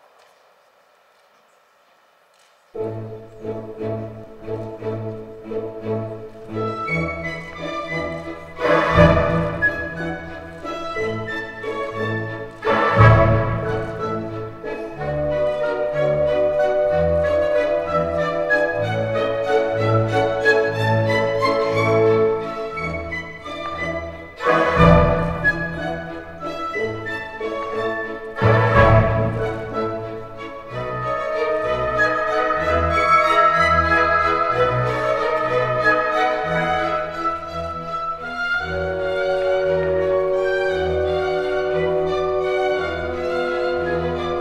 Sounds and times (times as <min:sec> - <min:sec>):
Opera: 0:02.7 - 0:44.4.